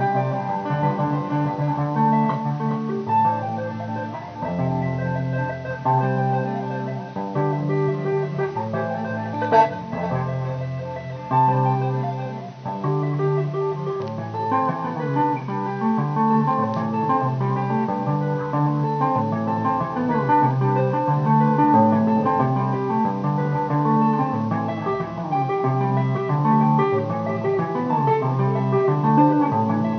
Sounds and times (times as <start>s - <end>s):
Musical instrument: 0.0s - 29.9s.